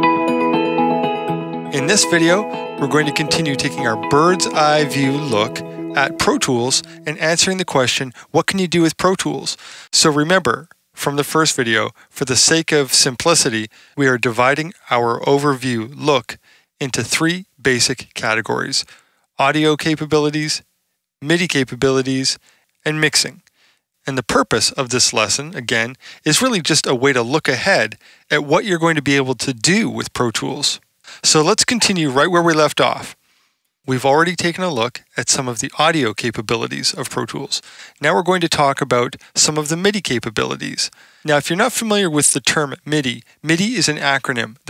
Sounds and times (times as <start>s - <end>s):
Speech: 1.7s - 33.2s, 33.9s - 44.6s.